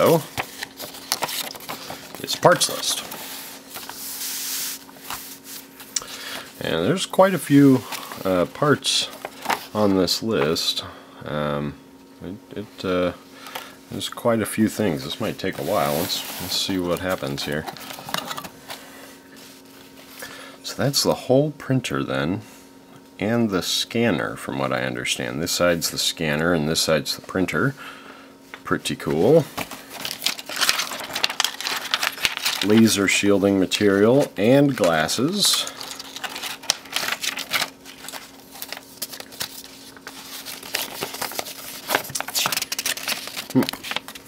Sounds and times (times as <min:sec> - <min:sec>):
Speech: 0:00.0 - 0:00.3, 0:02.2 - 0:03.1, 0:06.6 - 0:13.2, 0:13.9 - 0:17.7, 0:20.6 - 0:22.5, 0:23.2 - 0:27.8, 0:28.6 - 0:29.6, 0:32.6 - 0:35.8.